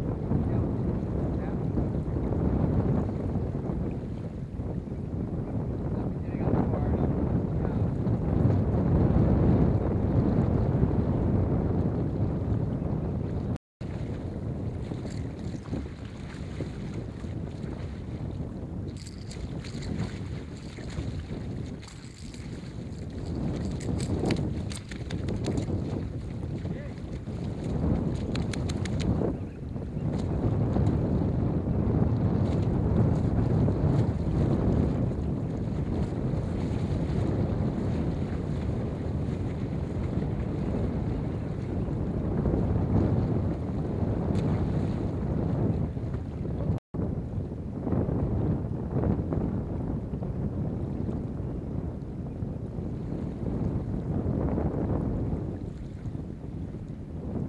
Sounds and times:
Speech: 0.4s - 1.7s, 6.0s - 7.9s, 26.7s - 27.0s.

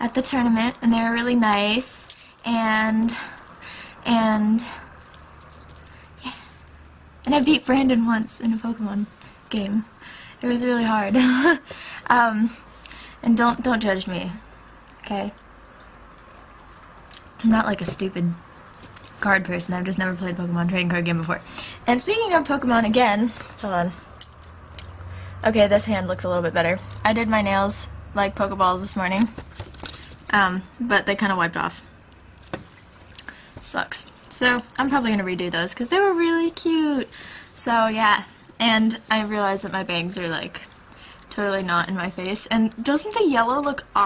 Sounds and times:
Speech: 0.0s - 3.2s, 4.1s - 4.8s, 7.3s - 12.6s, 13.2s - 14.4s, 15.0s - 15.4s, 17.4s - 18.4s, 19.2s - 24.0s, 25.4s - 29.3s, 30.3s - 31.8s, 33.6s - 40.7s, 41.3s - 44.0s.

